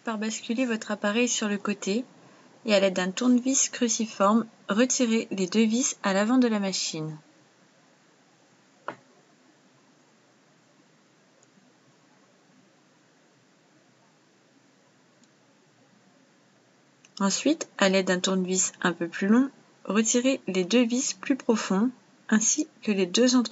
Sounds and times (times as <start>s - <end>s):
Speech: 0.0s - 2.1s, 2.7s - 7.2s, 17.2s - 23.5s.